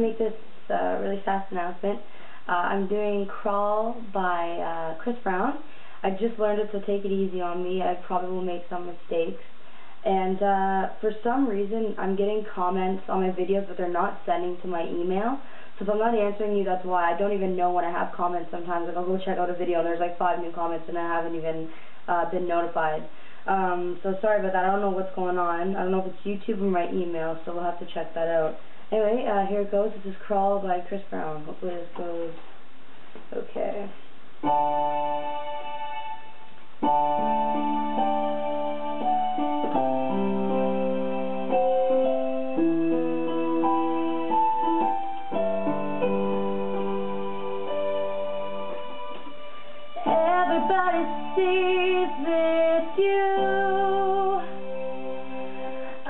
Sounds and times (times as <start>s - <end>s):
Speech: 0.0s - 9.4s, 10.0s - 32.4s, 33.3s - 34.0s
Music: 34.4s - 56.0s.